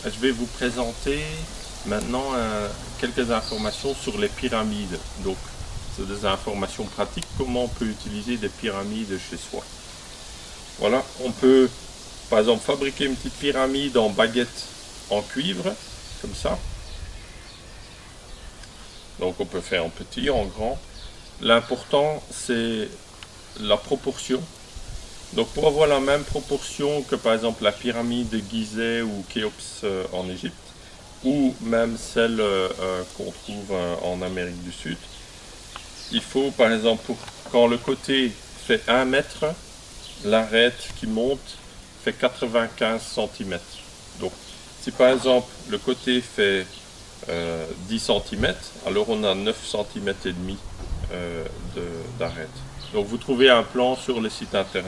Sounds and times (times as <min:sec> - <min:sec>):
Speech: 0:00.0 - 0:09.7, 0:10.8 - 0:16.7, 0:19.2 - 0:20.8, 0:21.4 - 0:23.0, 0:23.6 - 0:24.6, 0:25.3 - 0:30.6, 0:31.2 - 0:35.2, 0:36.1 - 0:39.6, 0:40.2 - 0:54.8.